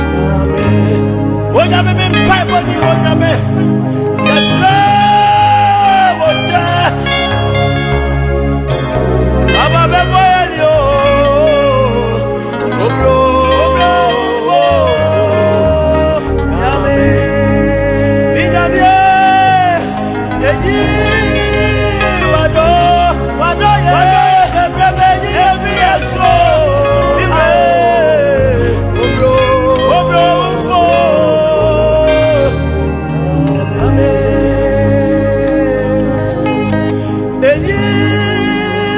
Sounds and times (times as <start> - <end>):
Gospel music: 0.0 - 38.9.